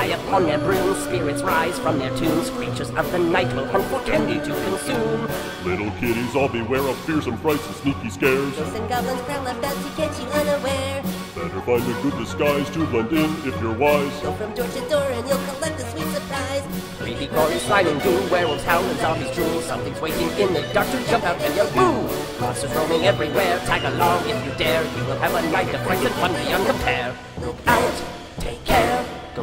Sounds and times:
Choir: 0.0 - 10.7, 11.4 - 15.4, 17.0 - 29.4.

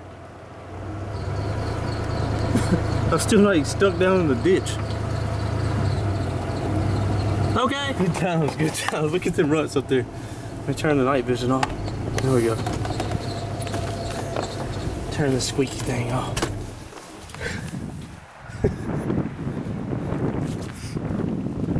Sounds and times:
Truck: 0.0 - 21.7.

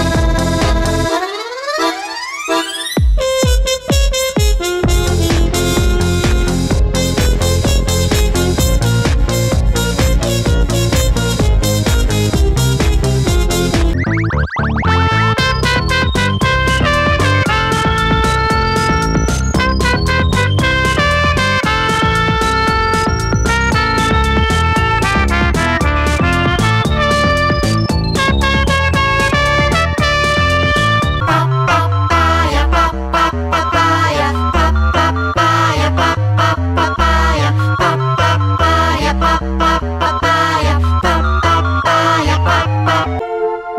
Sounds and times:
Electronic music: 0.0 - 43.7.

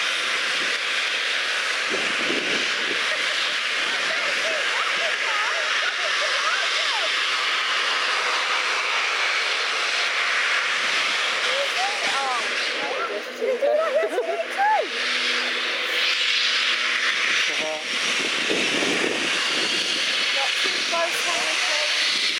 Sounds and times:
Hiss: 0.0 - 13.3, 14.5 - 22.3
Speech: 20.4 - 22.0.

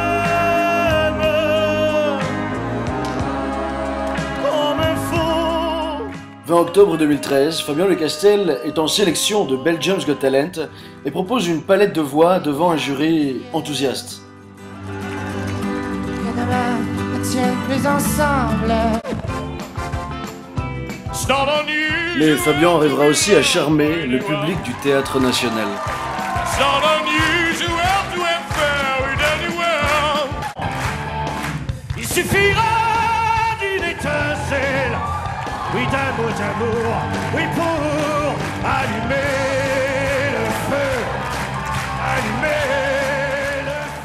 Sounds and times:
Music: 0.0 - 44.0
Speech: 6.5 - 14.2, 22.2 - 25.8.

